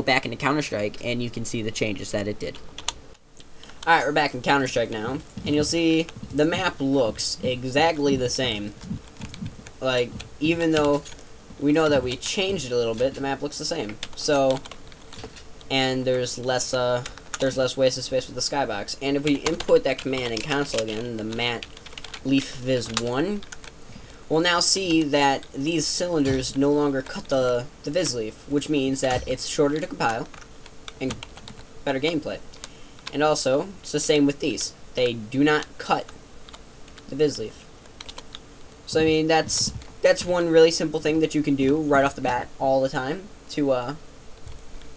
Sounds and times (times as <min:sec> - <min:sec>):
Speech: 0:00.0 - 0:02.6, 0:03.8 - 0:09.0, 0:09.8 - 0:14.7, 0:15.7 - 0:23.5, 0:24.3 - 0:30.4, 0:31.0 - 0:31.2, 0:31.9 - 0:32.4, 0:33.1 - 0:36.1, 0:37.1 - 0:37.6, 0:38.9 - 0:44.0
Computer keyboard: 0:19.4 - 0:22.2, 0:31.1 - 0:31.6, 0:38.0 - 0:38.3.